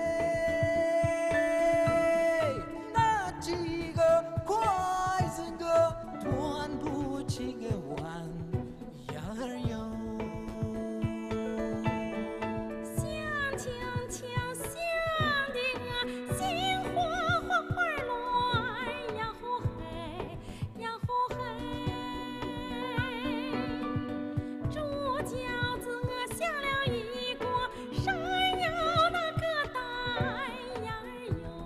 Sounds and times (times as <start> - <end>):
Music: 0.0 - 31.6
Female singing: 12.9 - 24.0, 24.6 - 31.6.